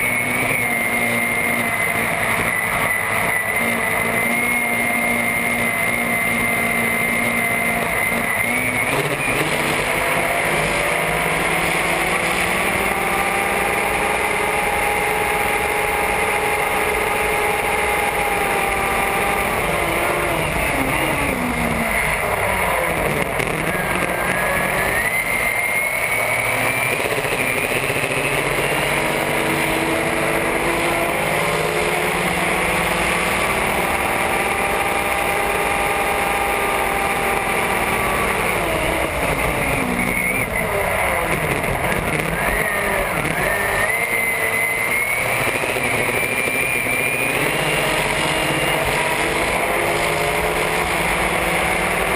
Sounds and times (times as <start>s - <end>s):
Motorboat, speedboat: 0.0s - 52.1s.